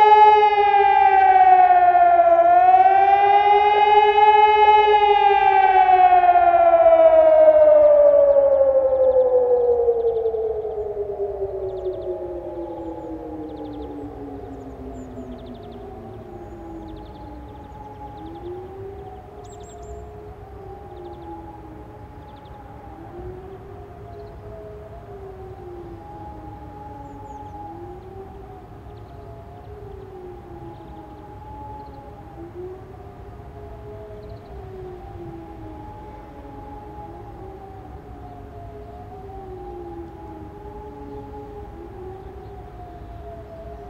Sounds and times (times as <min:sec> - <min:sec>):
Siren: 0:00.0 - 0:43.8.